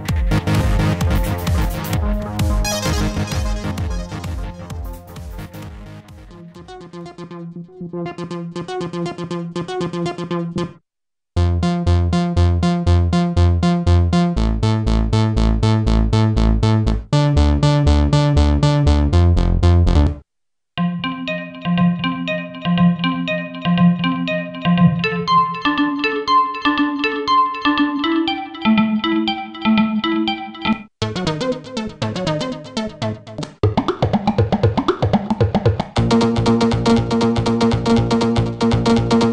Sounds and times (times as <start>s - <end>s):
Synthesizer: 0.0s - 9.2s, 20.8s - 35.1s.